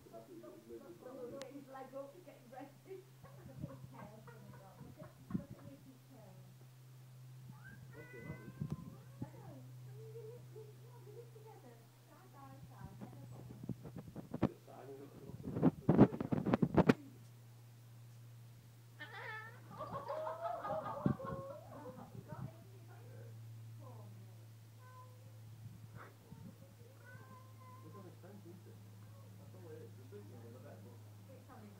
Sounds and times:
Cat: 0:07.5 - 0:09.1, 0:24.8 - 0:25.2, 0:26.0 - 0:28.0.

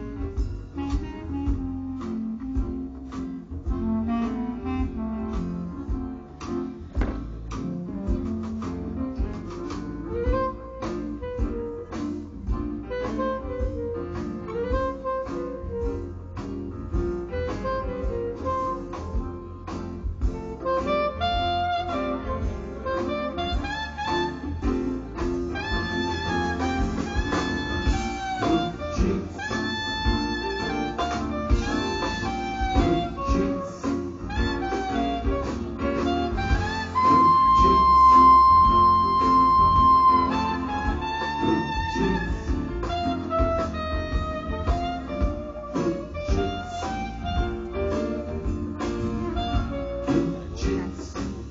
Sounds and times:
Inside, large room or hall: 0:00.0 - 0:51.5
Inside, public space: 0:00.0 - 0:51.5
Music: 0:00.0 - 0:51.5.

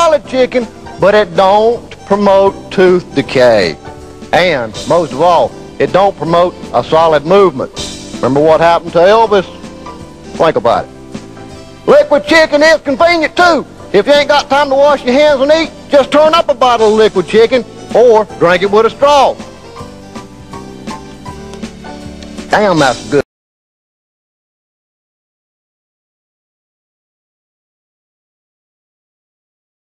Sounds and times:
Speech: 0:00.0 - 0:09.5, 0:10.4 - 0:10.9, 0:11.9 - 0:19.4, 0:22.5 - 0:23.3
Music: 0:00.0 - 0:23.3.

